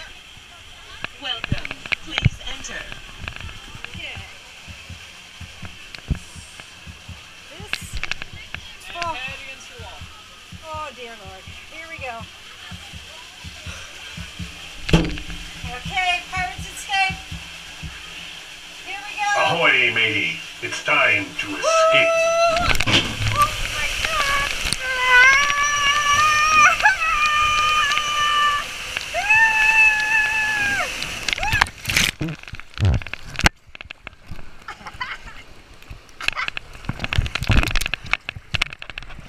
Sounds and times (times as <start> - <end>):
Stream: 0.0 - 39.2
Gurgling: 19.2 - 33.4.